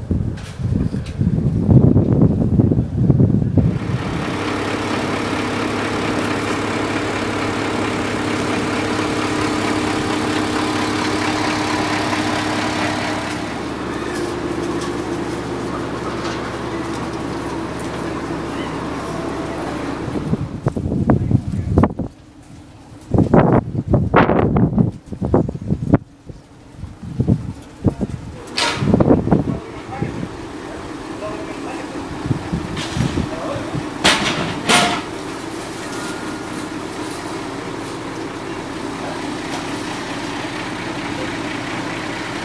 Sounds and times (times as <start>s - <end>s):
Speech: 29.4s - 32.1s, 33.2s - 33.8s.